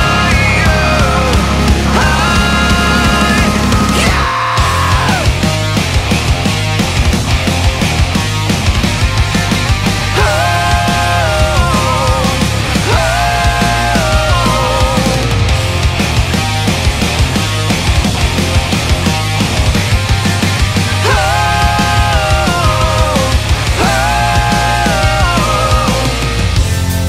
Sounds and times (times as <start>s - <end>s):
Exciting music: 0.0s - 27.0s.